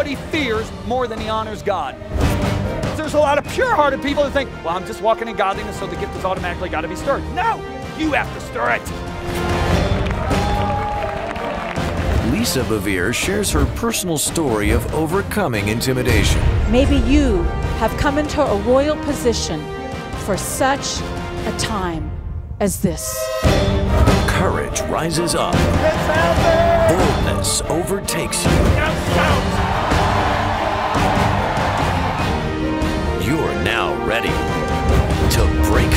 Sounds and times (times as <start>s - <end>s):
Music: 0.0s - 35.9s
Speech: 12.2s - 19.5s, 26.9s - 29.4s.